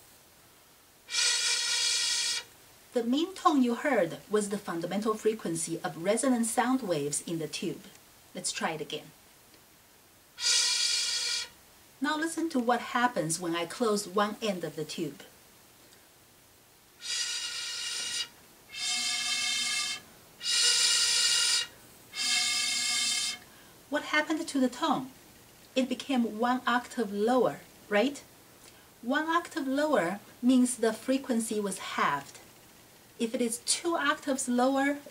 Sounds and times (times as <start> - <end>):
Speech: 3.0 - 9.2, 12.0 - 15.3, 23.9 - 25.2, 25.8 - 28.3, 29.0 - 32.4, 33.2 - 35.1.